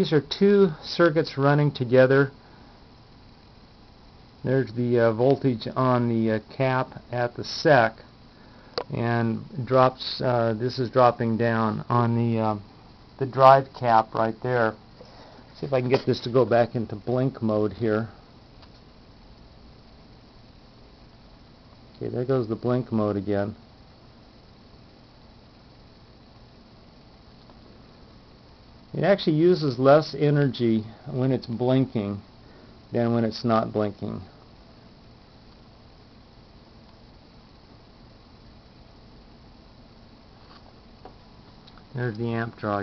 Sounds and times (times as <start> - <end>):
Speech: 0.0 - 2.4, 4.4 - 8.0, 8.9 - 14.8, 15.6 - 18.2, 22.0 - 23.6, 28.9 - 32.2, 32.9 - 34.3, 41.9 - 42.8.